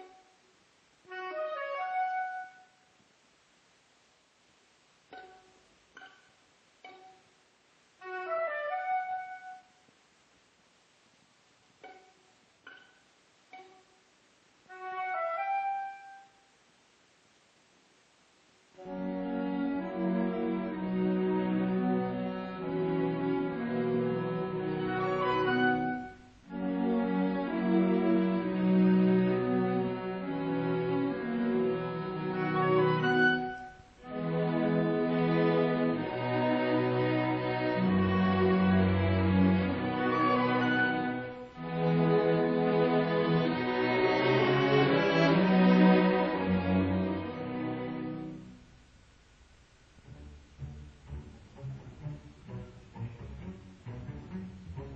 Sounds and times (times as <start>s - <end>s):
Orchestra: 1.0s - 2.9s, 8.0s - 9.8s, 14.6s - 16.4s, 18.8s - 48.7s, 50.0s - 54.9s.